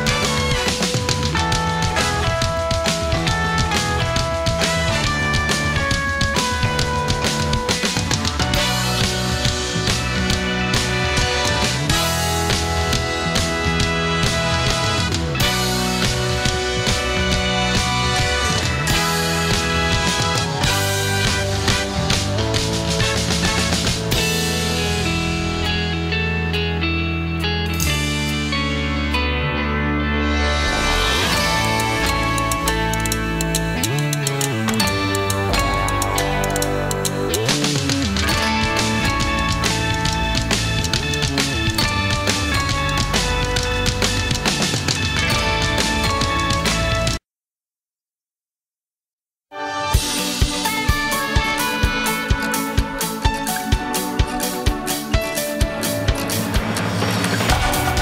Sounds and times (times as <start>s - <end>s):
Blues: 0.0s - 47.2s, 49.8s - 58.0s.